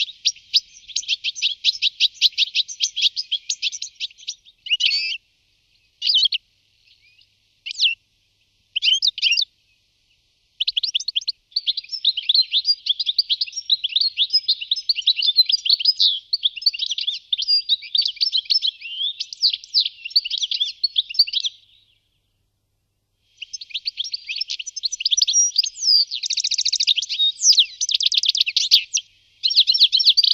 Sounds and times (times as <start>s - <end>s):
Outside, rural or natural: 0.0s - 30.3s.